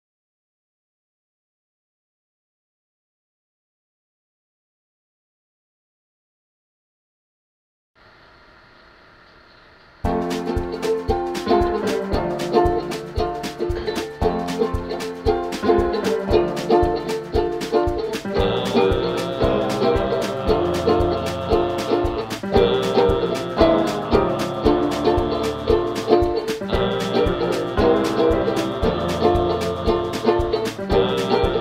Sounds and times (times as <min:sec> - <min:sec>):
Music: 0:10.0 - 0:31.6.